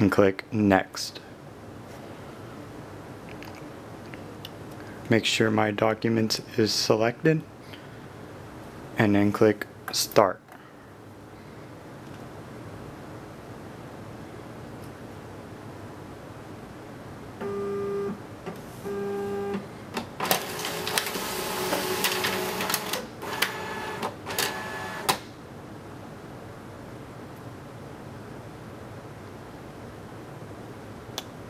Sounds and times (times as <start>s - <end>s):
Printer: 20.2s - 25.2s.